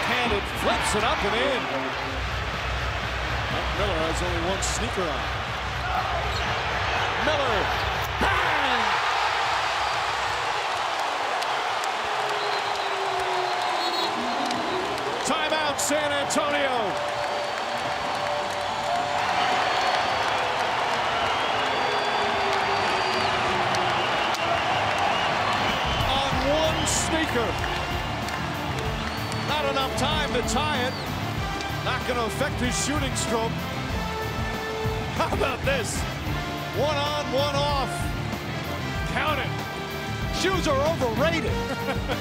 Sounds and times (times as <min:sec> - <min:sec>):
Speech: 0:03.8 - 0:05.2, 0:31.9 - 0:33.5.